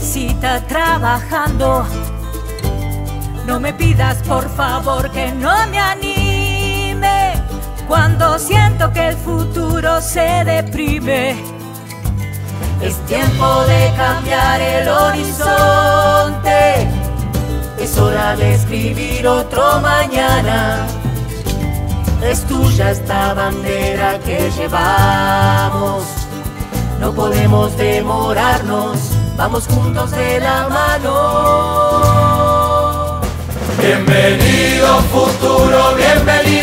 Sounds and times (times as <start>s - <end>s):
Music: 0.0s - 36.6s.